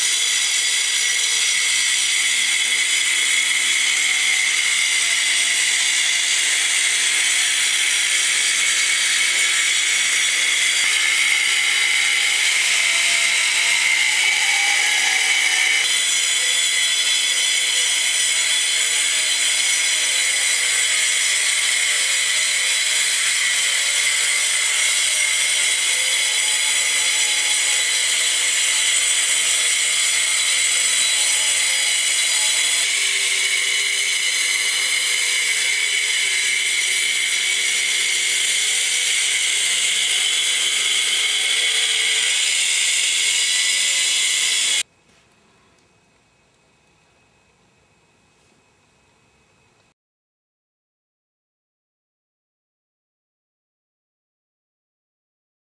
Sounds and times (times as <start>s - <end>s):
Power tool: 0.0s - 44.9s.